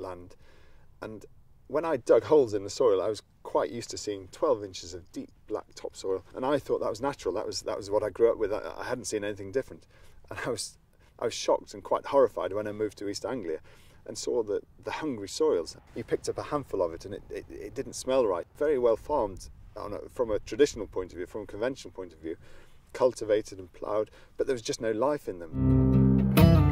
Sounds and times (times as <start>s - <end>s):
Speech: 0.0s - 0.4s, 1.0s - 25.6s.